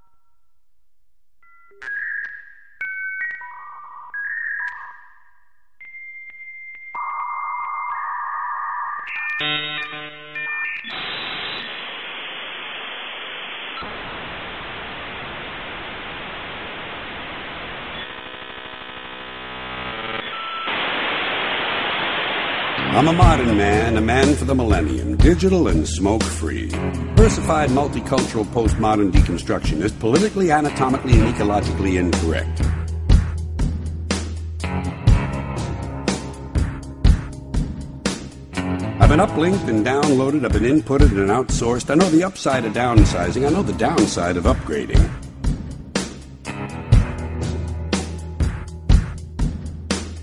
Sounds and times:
Music: 0:01.4 - 0:11.8, 0:22.8 - 0:50.2
Speech: 0:22.9 - 0:32.6, 0:39.0 - 0:45.2.

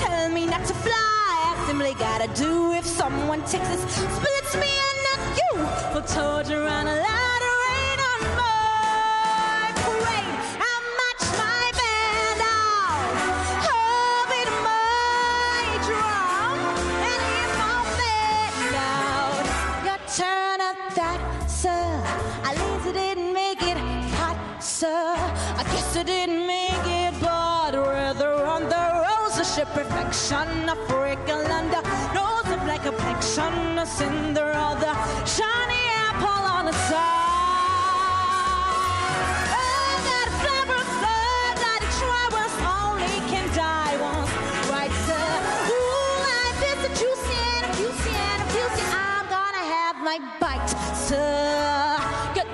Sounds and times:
Music: 0:00.0 - 0:52.5.

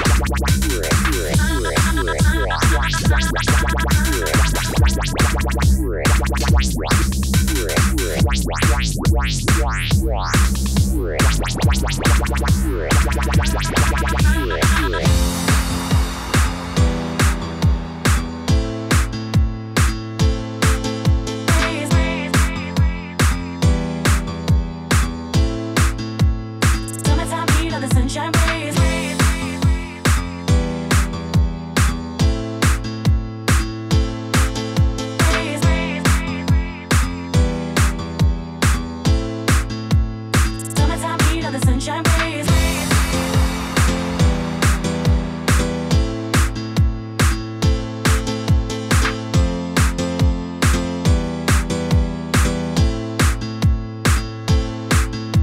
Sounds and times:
Music: 0:00.0 - 0:55.4.

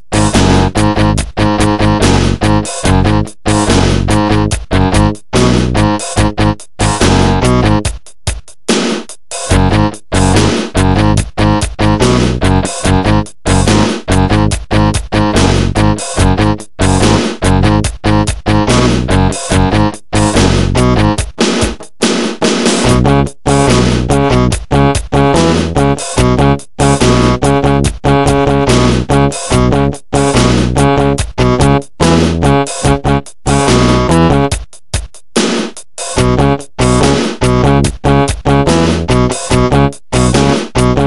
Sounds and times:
Music: 0:00.0 - 0:41.0.

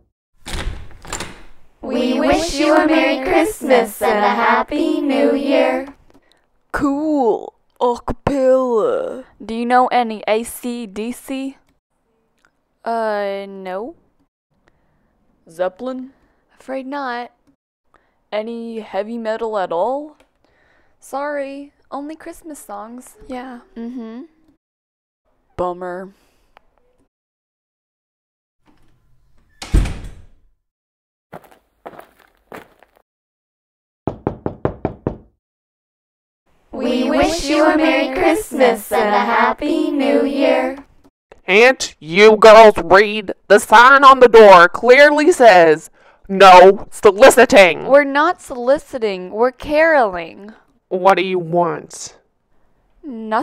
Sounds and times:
Inside, small room: 0:00.0 - 0:24.6, 0:36.5 - 0:53.4
Knock: 0:34.1 - 0:35.3.

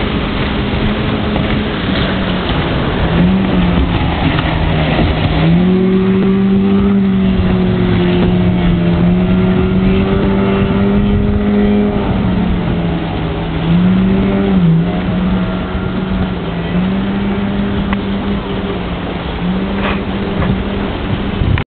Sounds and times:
Motorboat, speedboat: 0:00.0 - 0:21.7.

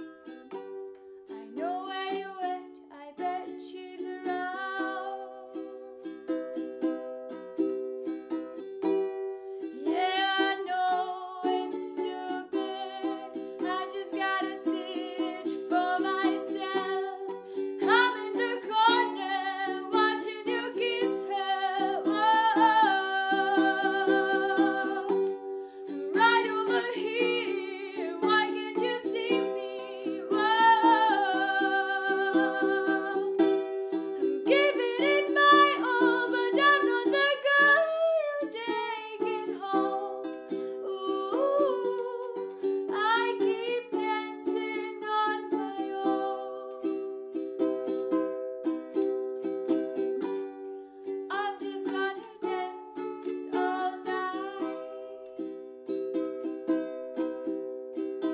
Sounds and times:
Inside, small room: 0:00.0 - 0:58.3
Ukulele: 0:00.0 - 0:58.3.

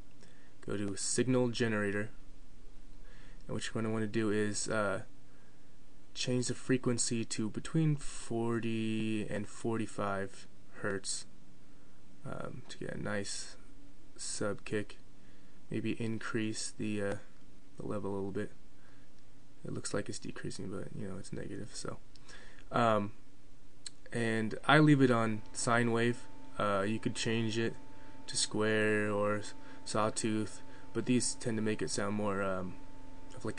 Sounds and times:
Speech: 0:00.6 - 0:02.2, 0:03.5 - 0:05.1, 0:06.2 - 0:11.3, 0:12.2 - 0:15.0, 0:15.7 - 0:18.6, 0:19.6 - 0:22.0, 0:22.7 - 0:23.2, 0:23.9 - 0:32.8, 0:33.4 - 0:33.5.

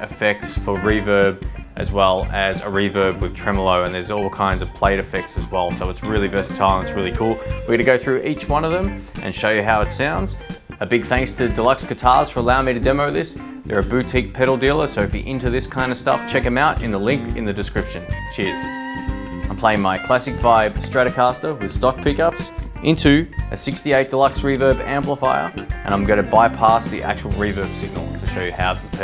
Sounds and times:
Speech: 0:00.0 - 0:18.7, 0:19.5 - 0:29.0
Music: 0:00.0 - 0:29.0.

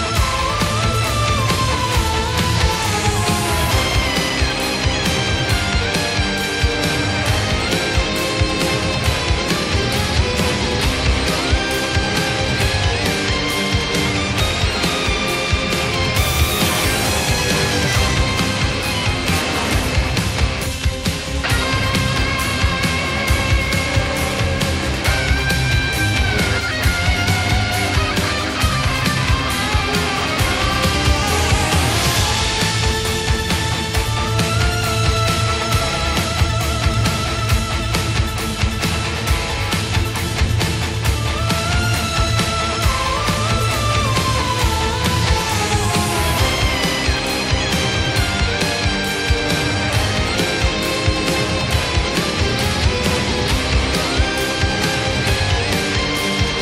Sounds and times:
Music: 0:00.0 - 0:56.6.

